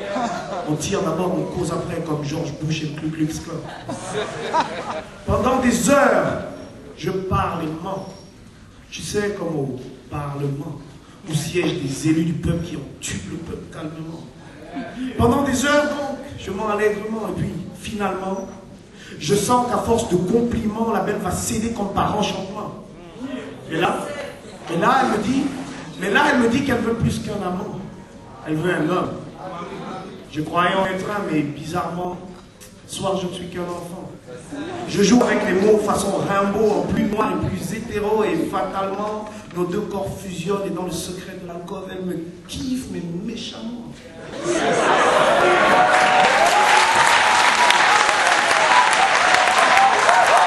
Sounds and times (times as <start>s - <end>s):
Speech: 0.0s - 3.8s, 8.9s - 18.6s, 19.2s - 32.3s, 32.9s - 44.4s.